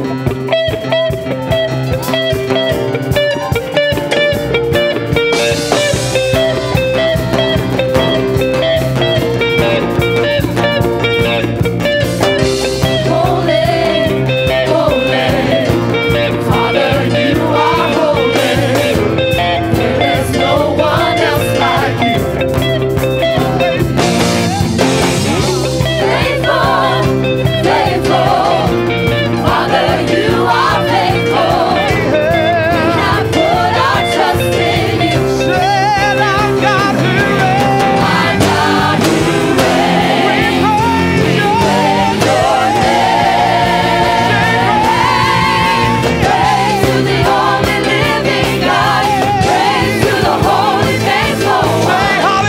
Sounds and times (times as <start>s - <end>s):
Music: 0.0s - 52.4s.